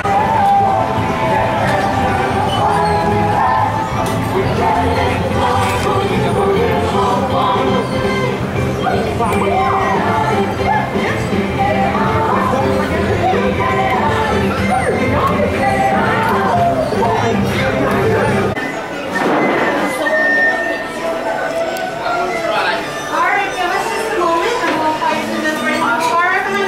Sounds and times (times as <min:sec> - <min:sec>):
Music: 0:00.0 - 0:26.6.